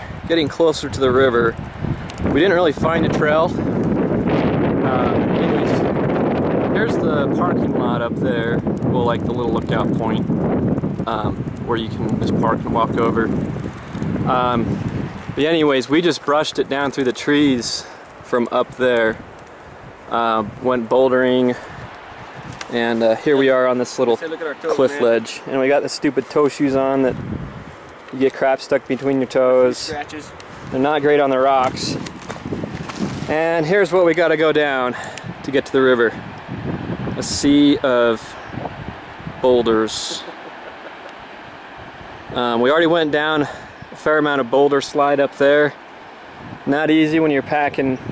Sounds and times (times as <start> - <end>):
Speech: 0.3 - 1.6, 2.3 - 3.6, 4.8 - 5.9, 6.7 - 10.3, 11.1 - 13.4, 14.3 - 14.7, 15.4 - 19.2, 20.1 - 21.6, 22.7 - 27.2, 28.1 - 32.0, 33.3 - 36.2, 37.2 - 38.4, 39.4 - 40.3, 42.4 - 45.8, 46.7 - 48.0.